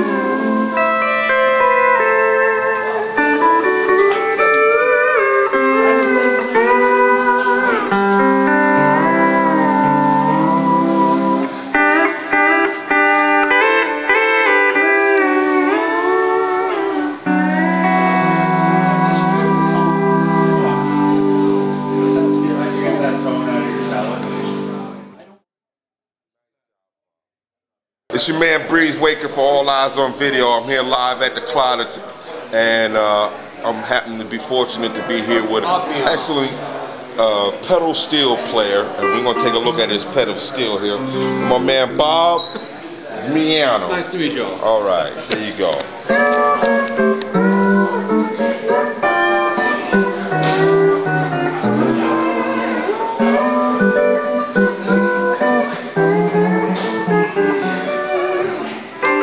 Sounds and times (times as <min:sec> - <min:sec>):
Steel guitar, slide guitar: 0:00.0 - 0:25.2, 0:34.8 - 0:42.3, 0:45.6 - 0:59.2
Speech: 0:18.6 - 0:25.4, 0:28.1 - 0:45.9.